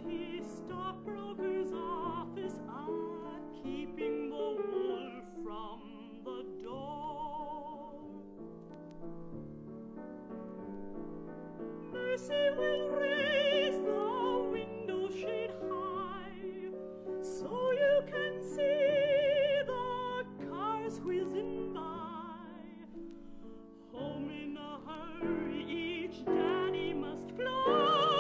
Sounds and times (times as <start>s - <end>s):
Lullaby: 12.0s - 23.0s, 23.9s - 28.2s.